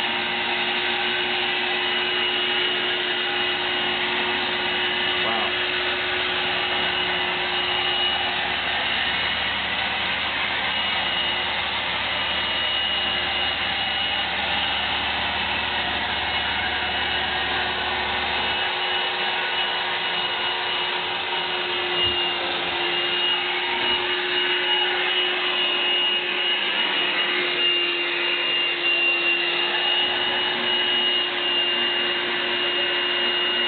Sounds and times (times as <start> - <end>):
Vacuum cleaner: 0.0 - 33.6.